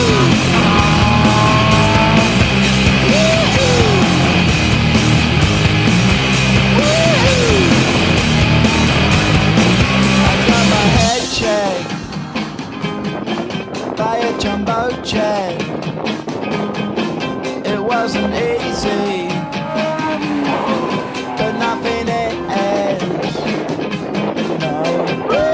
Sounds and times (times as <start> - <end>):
Music: 0.0 - 25.5.